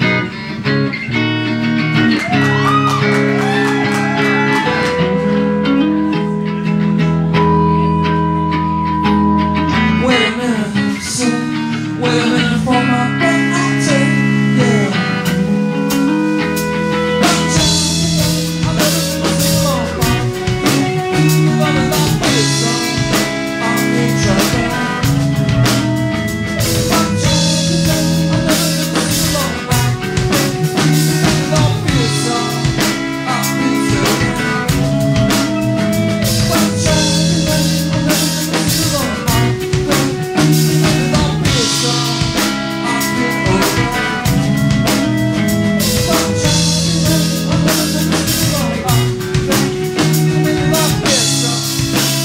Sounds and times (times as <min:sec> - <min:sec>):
Music: 0:00.0 - 0:52.2.